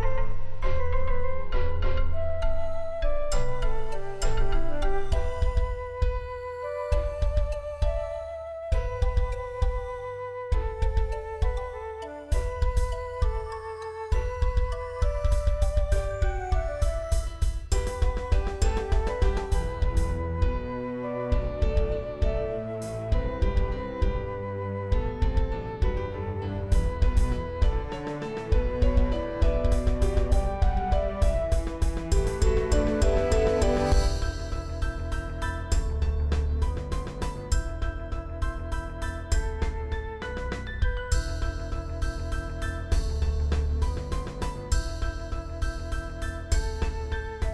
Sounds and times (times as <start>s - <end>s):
Background music: 0.0s - 47.5s
Tender music: 0.0s - 47.5s
Video game music: 0.1s - 47.5s.